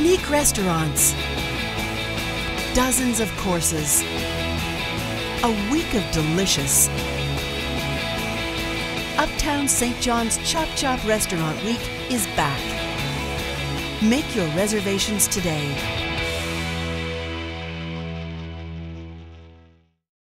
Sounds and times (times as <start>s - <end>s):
Speech: 0.0s - 1.2s, 2.8s - 4.0s, 5.4s - 6.9s, 9.2s - 12.8s, 14.0s - 15.8s
Music: 0.0s - 20.0s.